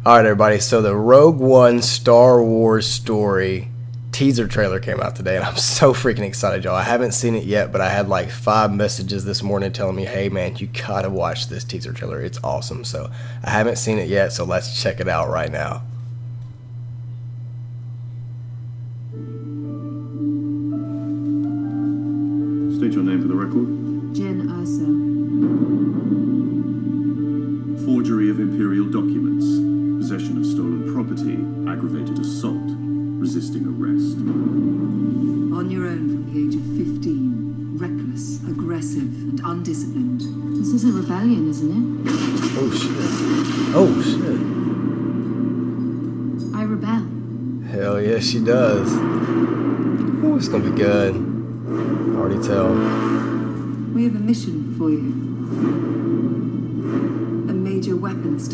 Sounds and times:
Music: 0.0 - 58.5.

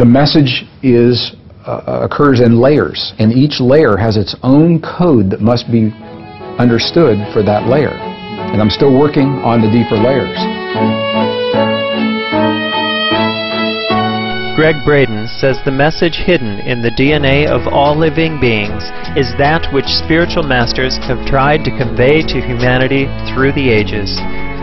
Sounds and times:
Speech: 0.0 - 5.9, 6.6 - 10.5, 14.6 - 24.2
Violin, fiddle: 5.6 - 24.6.

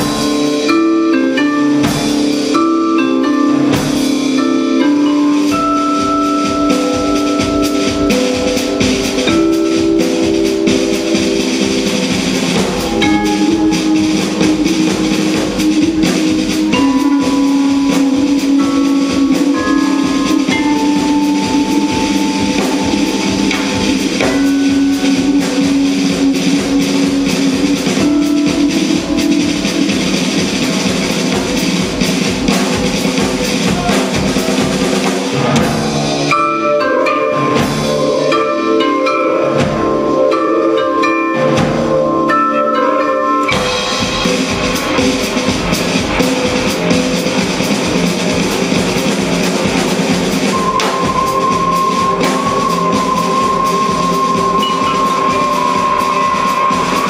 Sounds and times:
Drum: 0.0 - 42.7, 43.4 - 57.0
Drum kit: 0.0 - 57.0
Marimba, xylophone: 0.0 - 57.0
Vibraphone: 0.0 - 57.0.

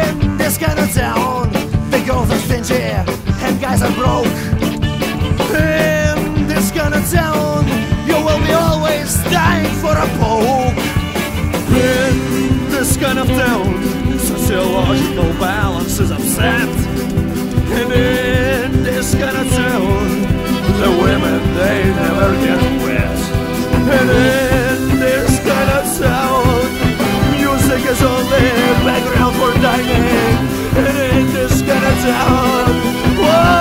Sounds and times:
Punk rock: 0.0 - 33.6.

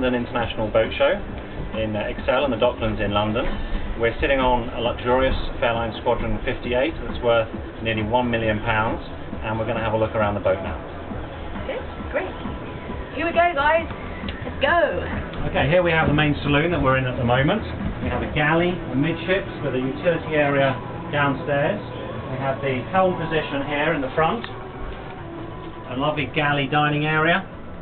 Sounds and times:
Music: 0.0 - 27.8.

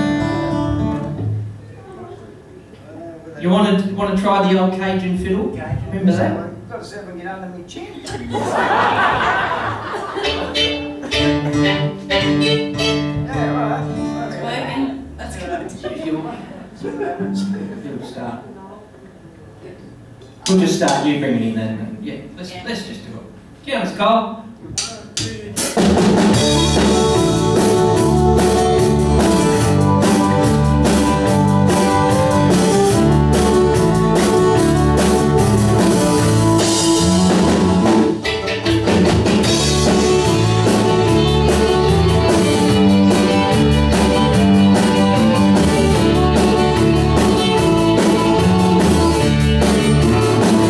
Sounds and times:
Speech: 1.6 - 8.4, 13.2 - 25.8.

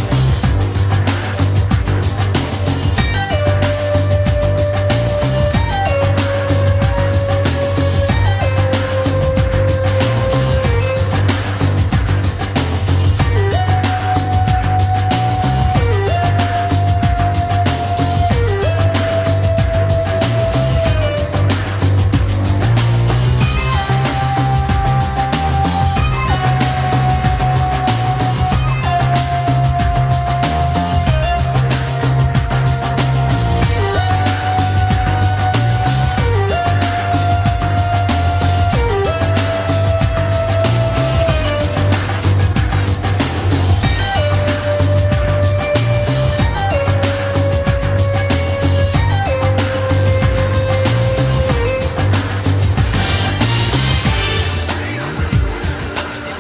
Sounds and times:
Music: 0.0 - 56.4.

